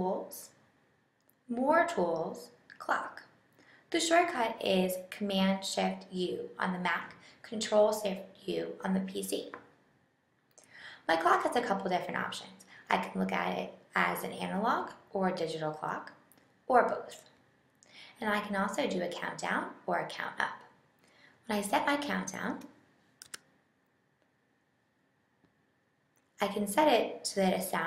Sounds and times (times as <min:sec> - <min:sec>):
Speech: 0:00.0 - 0:00.6, 0:01.5 - 0:09.7, 0:11.1 - 0:17.4, 0:18.1 - 0:20.8, 0:21.5 - 0:22.8, 0:26.4 - 0:27.8.